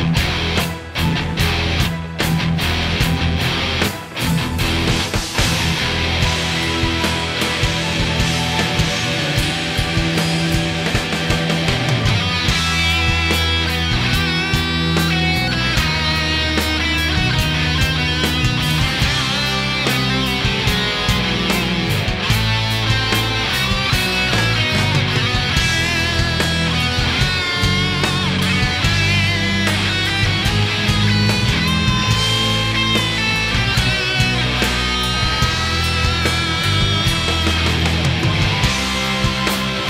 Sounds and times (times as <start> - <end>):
Music: 0.0 - 39.8.